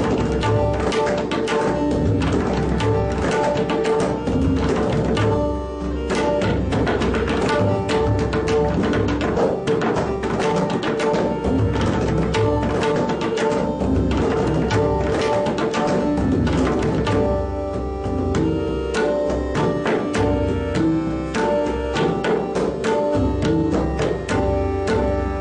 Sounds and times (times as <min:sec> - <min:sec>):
Tabla: 0:00.0 - 0:25.4.